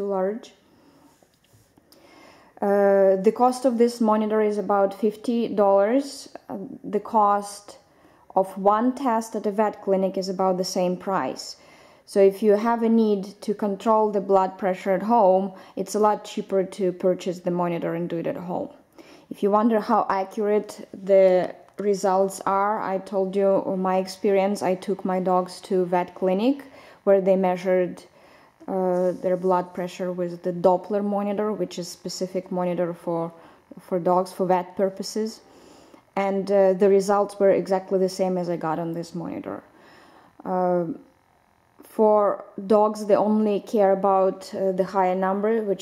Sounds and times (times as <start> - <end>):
Speech: 0.0 - 0.6, 2.6 - 7.8, 8.4 - 28.1, 28.7 - 35.4, 36.2 - 39.7, 40.4 - 41.1, 41.8 - 45.8.